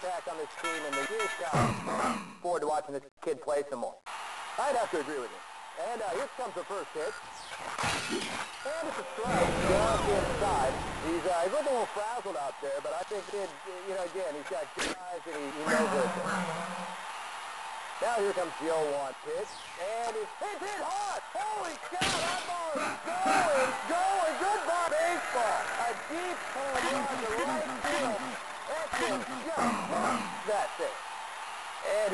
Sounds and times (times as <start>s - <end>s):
Speech: 0.0s - 1.7s, 2.4s - 4.0s, 4.6s - 7.2s, 8.7s - 16.2s, 18.0s - 31.0s, 31.8s - 32.1s.